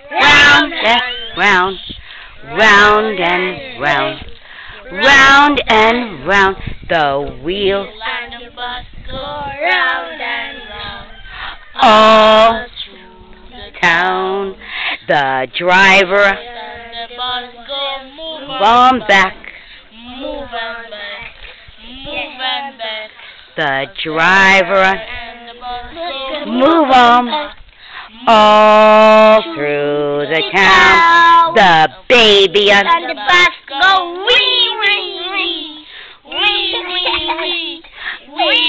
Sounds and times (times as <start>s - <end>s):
Child singing: 0.0s - 6.2s, 7.5s - 11.2s, 11.8s - 14.0s, 16.0s - 23.2s, 24.6s - 29.6s, 30.2s - 38.6s
Female singing: 0.0s - 6.6s, 7.2s - 14.6s, 15.6s - 29.6s.